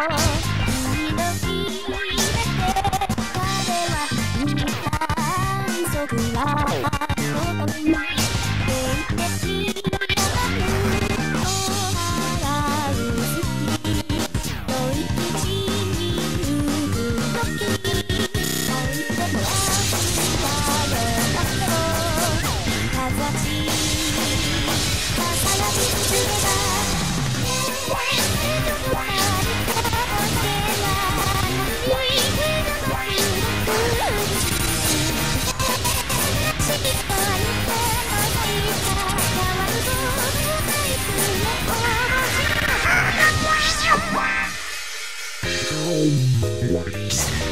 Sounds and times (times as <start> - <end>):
Music: 0.0 - 47.5.